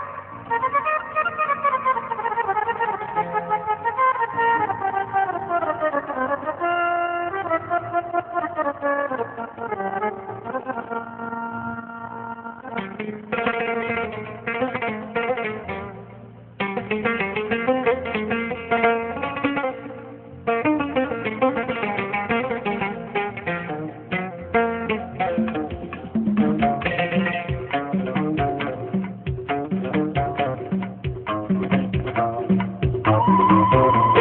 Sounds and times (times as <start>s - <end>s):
Music: 0.0s - 34.2s.